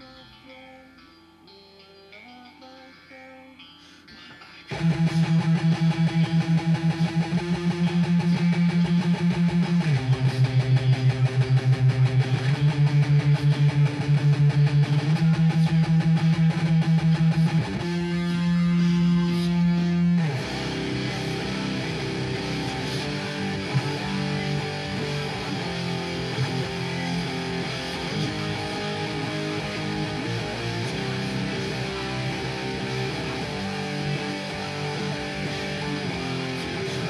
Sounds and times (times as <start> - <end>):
Music: 0.0 - 37.0.